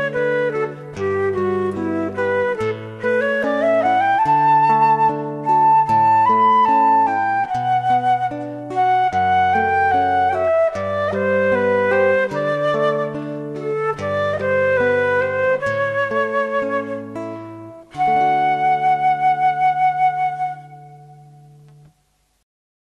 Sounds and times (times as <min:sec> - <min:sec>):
Background music: 0:00.0 - 0:21.9.